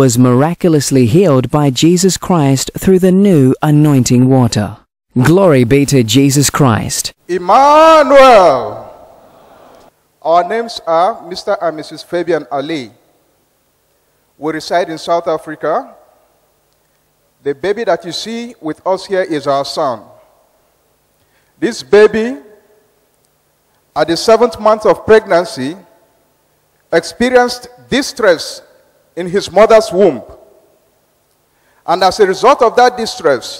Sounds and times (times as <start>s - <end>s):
Speech: 0.0s - 8.9s, 10.2s - 13.0s, 14.4s - 16.0s, 17.4s - 20.2s, 21.6s - 22.6s, 24.0s - 25.9s, 26.9s - 30.4s, 31.9s - 33.5s.